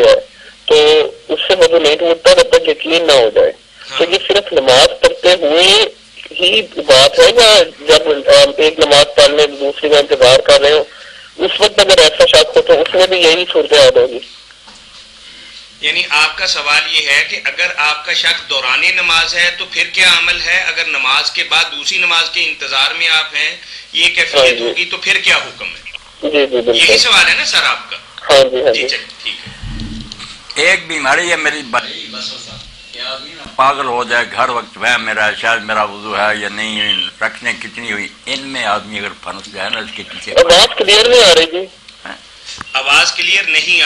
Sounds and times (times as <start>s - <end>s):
Speech: 0.0s - 14.3s, 15.8s - 29.5s, 30.6s - 42.2s, 42.8s - 43.8s.